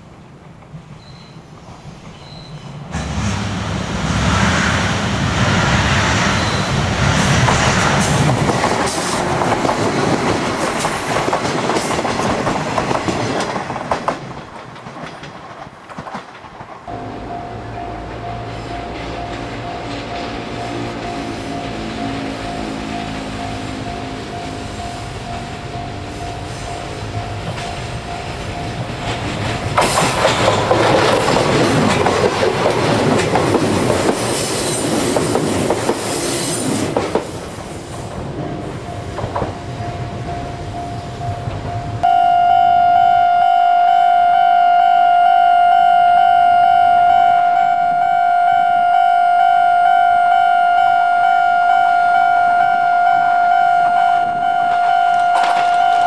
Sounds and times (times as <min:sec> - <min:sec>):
Outside, rural or natural: 0:00.0 - 0:56.0
Train: 0:00.0 - 0:56.0.